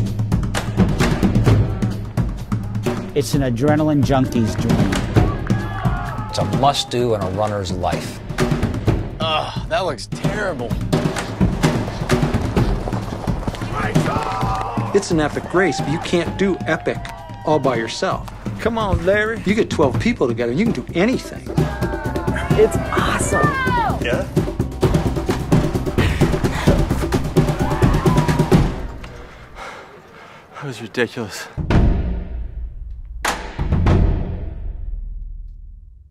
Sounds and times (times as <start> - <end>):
Music: 0.0 - 29.8, 31.4 - 36.1.